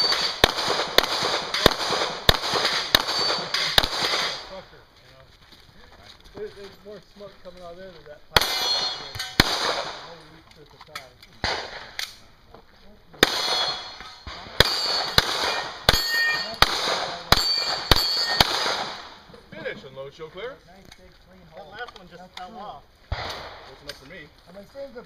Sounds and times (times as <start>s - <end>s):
Gunshot, gunfire: 0.0s - 4.5s, 8.4s - 10.1s, 11.4s - 12.0s, 13.2s - 19.2s, 23.1s - 23.8s.